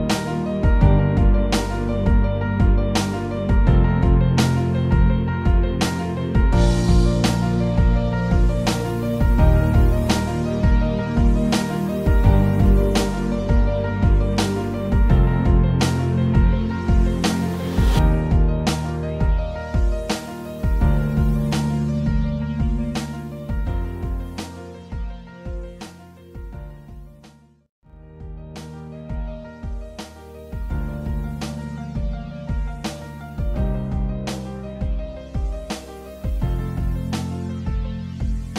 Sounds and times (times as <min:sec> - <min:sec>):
Music: 0:00.0 - 0:38.5.